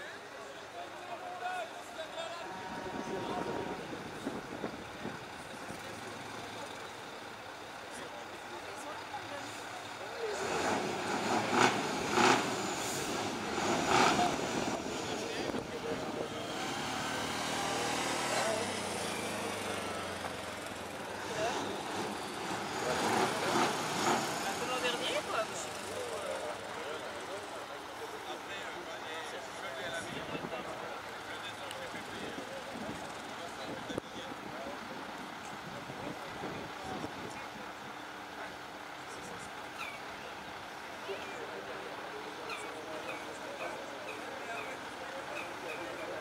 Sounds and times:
Speech: 0:00.0 - 0:11.8, 0:13.9 - 0:20.2, 0:21.2 - 0:46.2.

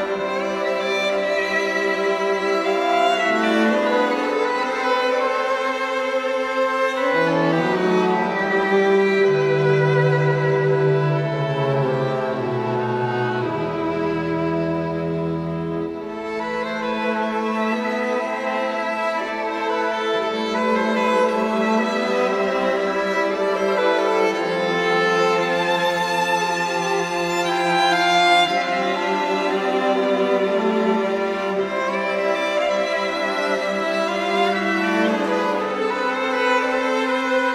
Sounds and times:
Bowed string instrument: 0:00.0 - 0:37.5
Inside, large room or hall: 0:00.0 - 0:37.5.

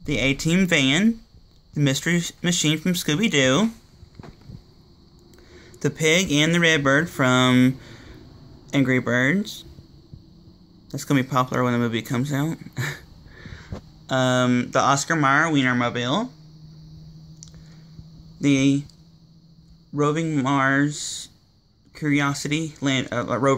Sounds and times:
Speech: 0:00.0 - 0:03.8, 0:05.8 - 0:07.8, 0:08.7 - 0:09.8, 0:10.9 - 0:13.0, 0:14.1 - 0:16.4, 0:18.4 - 0:18.9, 0:19.9 - 0:23.5.

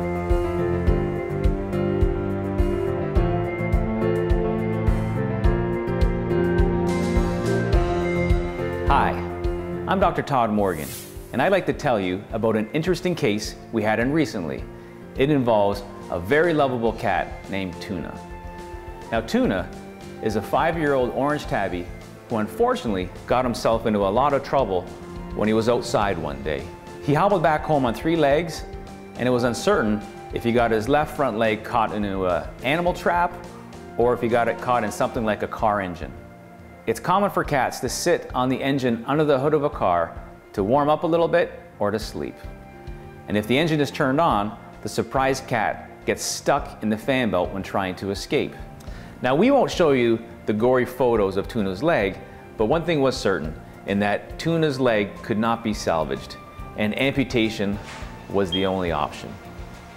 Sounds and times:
Music: 0:00.0 - 0:59.9
Speech: 0:08.9 - 0:09.3, 0:09.9 - 0:18.2, 0:19.1 - 0:33.4, 0:34.0 - 0:36.2, 0:36.9 - 0:42.5, 0:43.3 - 0:48.6, 0:49.2 - 0:59.4.

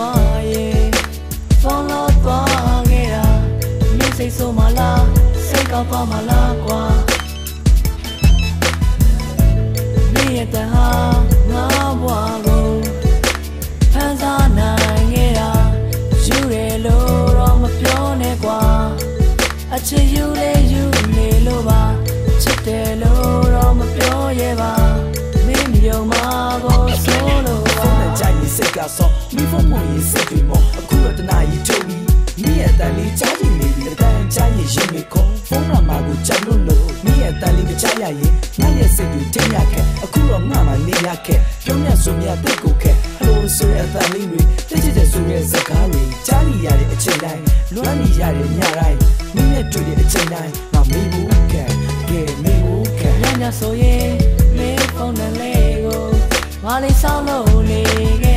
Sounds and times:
Music: 0:00.0 - 0:58.3
Ringtone: 0:02.5 - 0:13.4, 0:14.2 - 0:58.3
Telephone bell ringing: 0:07.2 - 0:08.7.

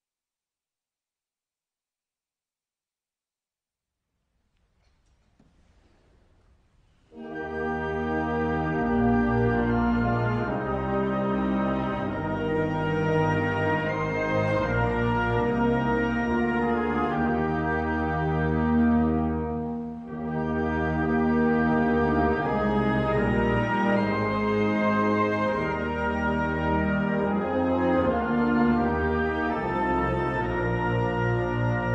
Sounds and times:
Music: 0:04.2 - 0:31.9.

